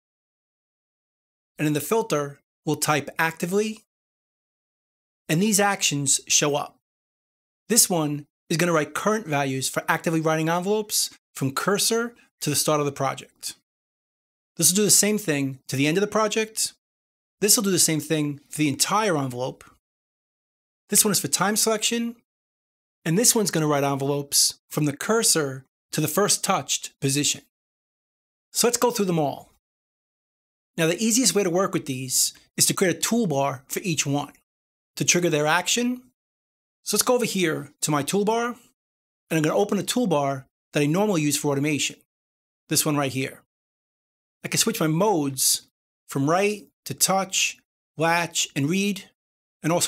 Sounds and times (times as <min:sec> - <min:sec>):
Speech: 0:01.6 - 0:03.9, 0:05.3 - 0:06.8, 0:07.7 - 0:13.6, 0:14.6 - 0:16.8, 0:17.4 - 0:19.8, 0:20.9 - 0:22.3, 0:23.1 - 0:27.5, 0:28.6 - 0:29.6, 0:30.8 - 0:34.4, 0:35.0 - 0:36.1, 0:36.9 - 0:38.7, 0:39.3 - 0:42.1, 0:42.7 - 0:43.5, 0:44.5 - 0:49.8.